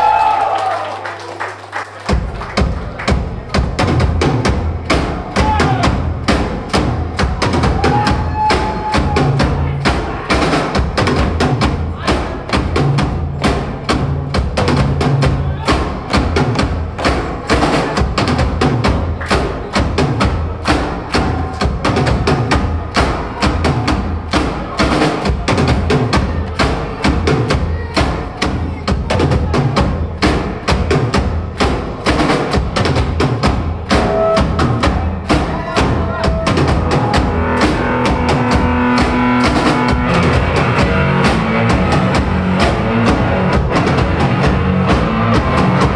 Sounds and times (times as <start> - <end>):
Music: 0.0 - 45.9.